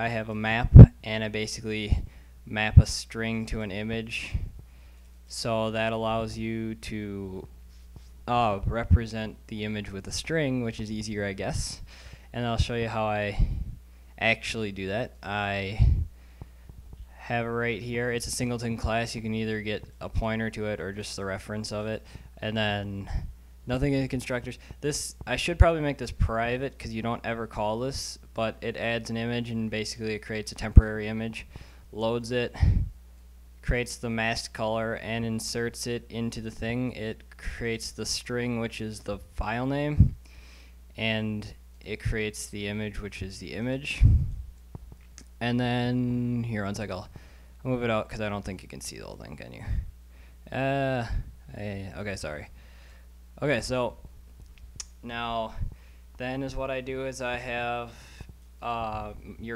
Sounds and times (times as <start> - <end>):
Speech: 0.0 - 4.5, 5.3 - 7.5, 8.2 - 16.1, 17.2 - 32.9, 33.6 - 40.2, 41.0 - 44.3, 45.3 - 49.9, 50.5 - 52.5, 53.4 - 54.1, 54.9 - 58.0, 58.6 - 59.5.